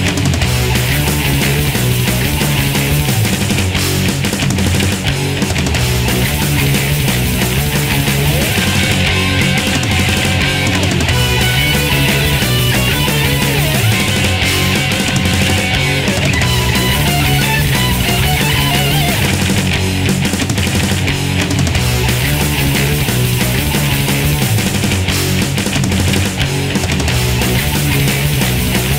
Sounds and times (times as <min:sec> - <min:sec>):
Theme music: 0:08.2 - 0:19.5.